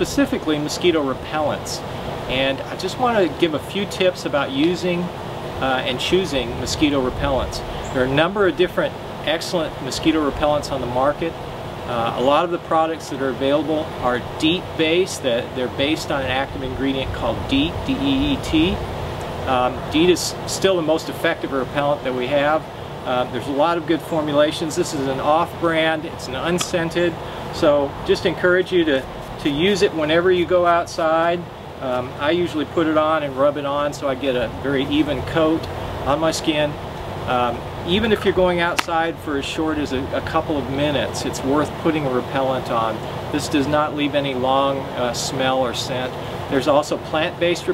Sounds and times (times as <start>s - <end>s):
Speech: 0.0s - 18.8s, 19.5s - 47.7s.